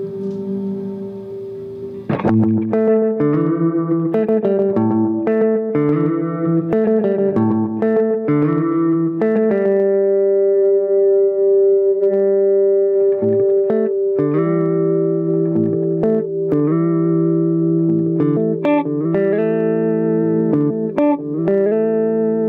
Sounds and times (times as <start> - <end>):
Effects unit: 0.0 - 22.4
Electronic tuner: 0.0 - 22.4
Guitar: 0.0 - 22.4
Inside, small room: 0.0 - 22.4.